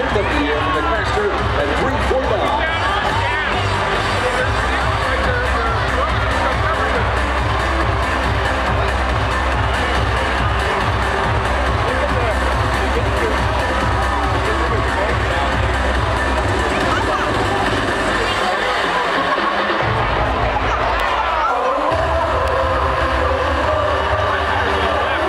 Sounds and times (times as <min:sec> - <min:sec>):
Speech: 0:00.0 - 0:07.5, 0:11.7 - 0:25.2
Music: 0:00.0 - 0:25.2.